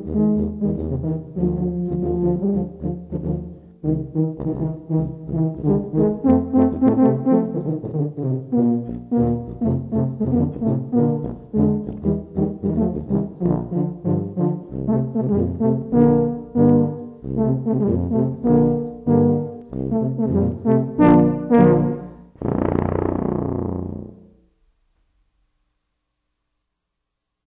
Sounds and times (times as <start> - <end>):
Brass instrument: 0.0 - 24.6.